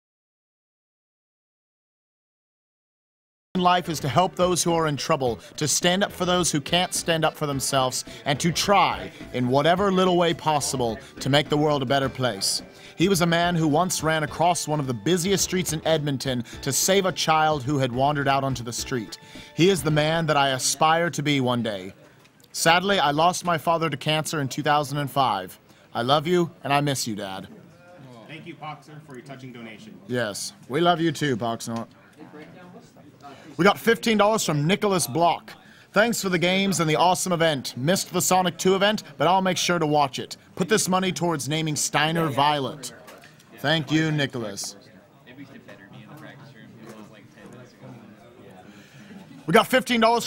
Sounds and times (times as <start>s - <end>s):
Speech: 3.6s - 50.2s.